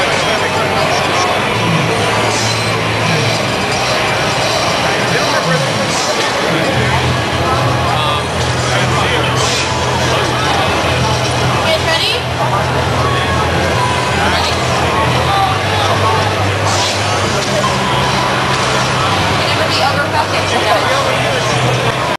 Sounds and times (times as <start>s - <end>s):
Music: 0.0s - 22.1s
Speech: 0.0s - 22.1s.